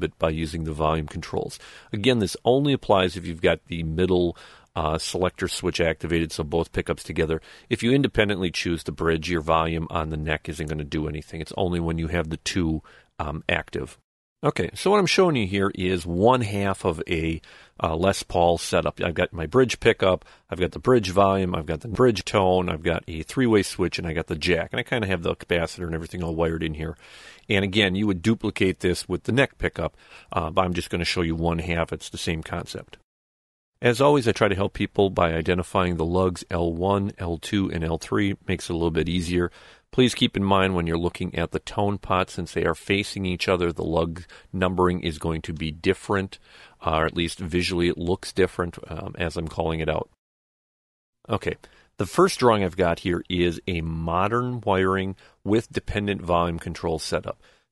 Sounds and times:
Speech: 0.0 - 33.0, 33.8 - 50.2, 51.3 - 57.4.

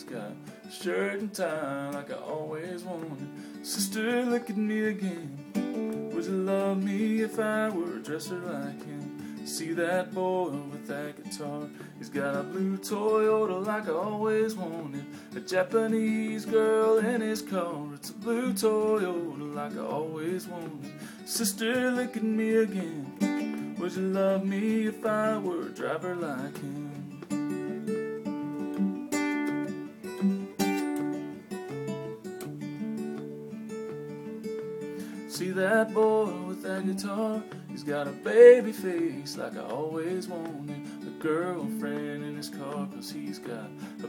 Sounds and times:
Acoustic guitar: 0.0 - 44.0.

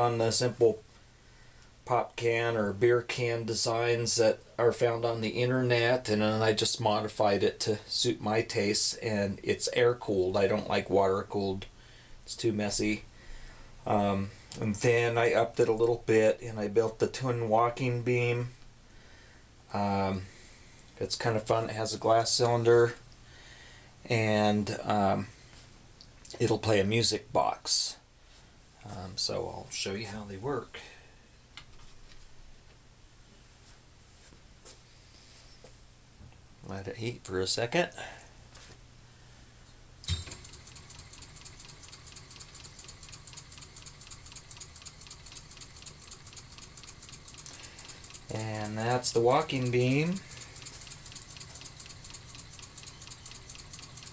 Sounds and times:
Speech: 0.0 - 0.8, 1.9 - 11.7, 12.3 - 13.0, 13.8 - 18.6, 19.7 - 20.3, 21.0 - 23.0, 24.1 - 25.3, 26.3 - 28.0, 28.8 - 31.0, 36.6 - 38.2, 48.3 - 50.2.

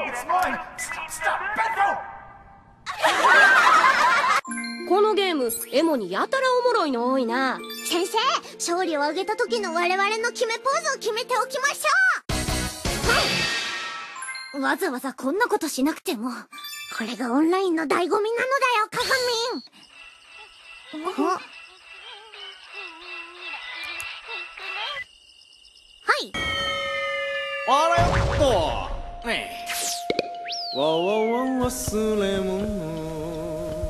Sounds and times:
Music: 4.4 - 14.7, 26.7 - 33.9.

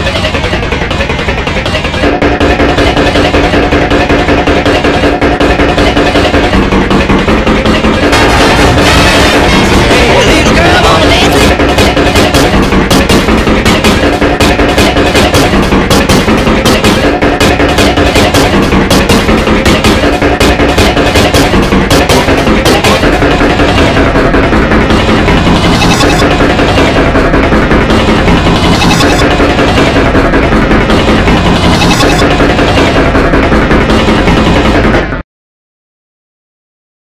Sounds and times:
Music: 0.0 - 35.2.

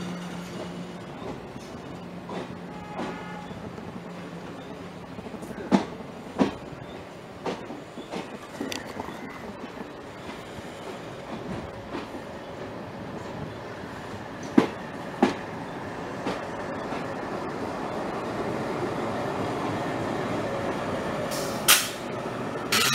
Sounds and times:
Railroad car, train wagon: 0.0 - 22.9
Train: 0.0 - 22.9.

